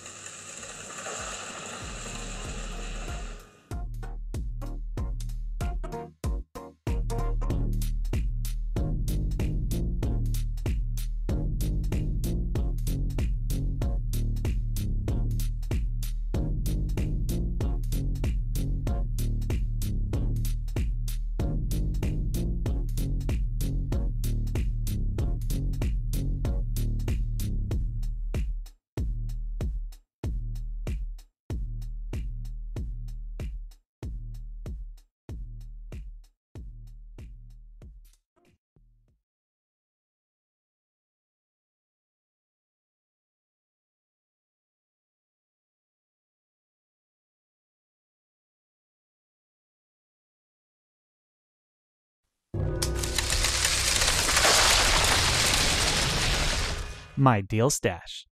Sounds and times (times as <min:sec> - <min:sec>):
Music: 0:01.1 - 0:39.2, 0:52.6 - 0:54.5.